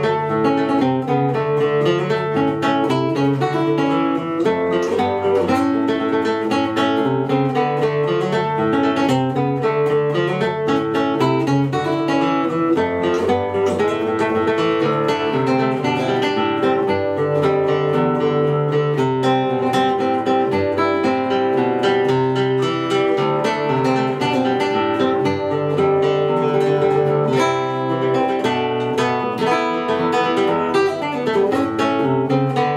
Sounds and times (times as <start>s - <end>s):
Guitar: 0.0s - 32.7s.